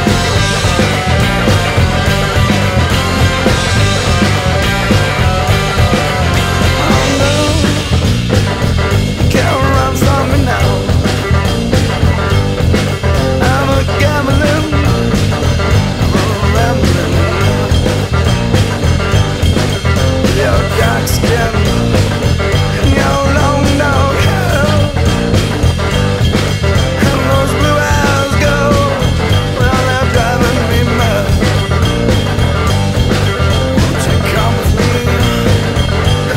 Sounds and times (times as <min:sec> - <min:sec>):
Music: 0:00.0 - 0:36.3.